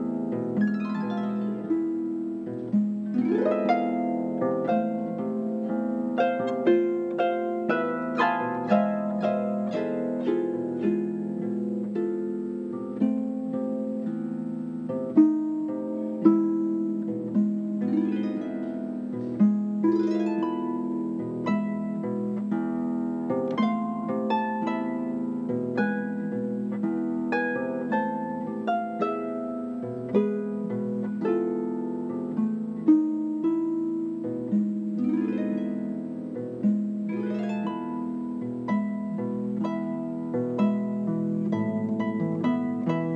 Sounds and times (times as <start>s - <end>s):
Bowed string instrument: 0.0s - 43.1s
Harp: 0.0s - 43.1s.